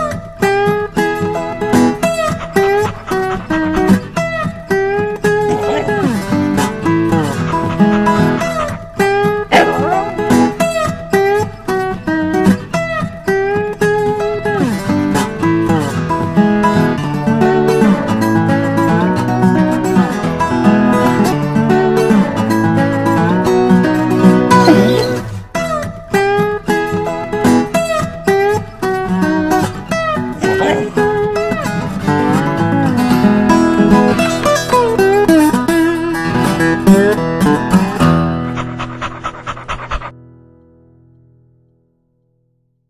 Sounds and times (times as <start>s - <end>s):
Music: 0.0s - 42.8s
Yip: 5.4s - 6.2s, 9.5s - 10.9s, 24.6s - 25.4s, 30.4s - 31.1s.